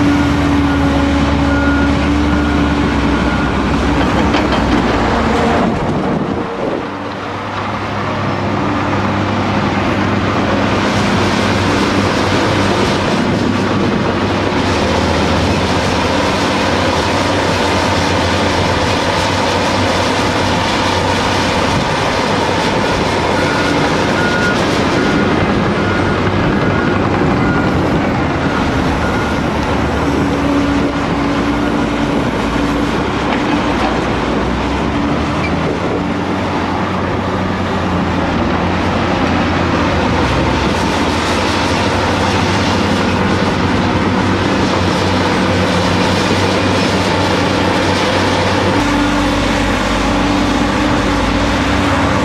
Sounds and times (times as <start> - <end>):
Vehicle: 0.0 - 52.2.